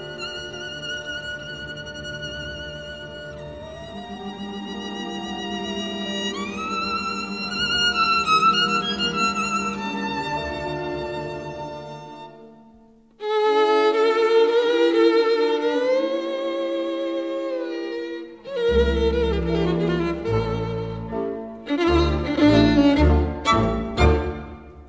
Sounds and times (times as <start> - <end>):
String section: 0.0 - 24.8.